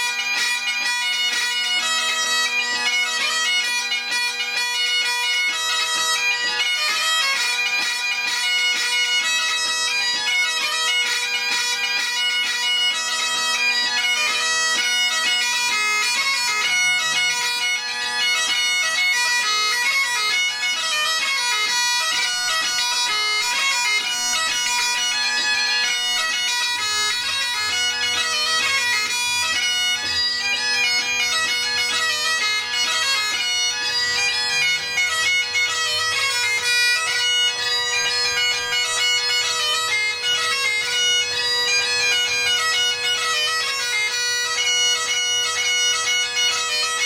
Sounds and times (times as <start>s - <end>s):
Bagpipes: 0.0s - 47.0s
Wind instrument, woodwind instrument: 0.0s - 47.0s.